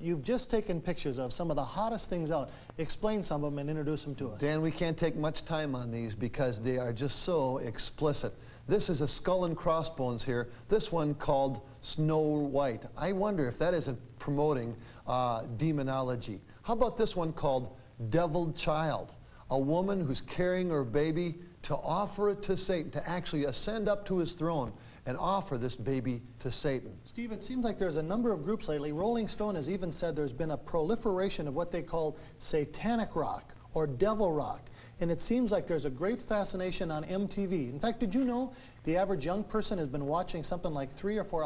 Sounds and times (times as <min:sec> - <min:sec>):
Speech: 0:00.0 - 0:41.4.